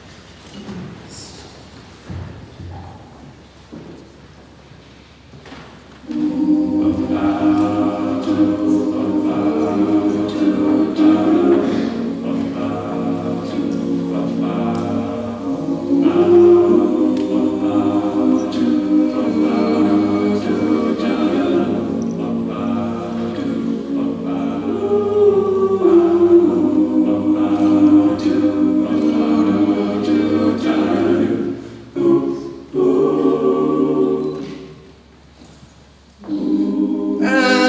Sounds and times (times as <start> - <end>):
Music: 6.1 - 34.7, 36.2 - 37.6.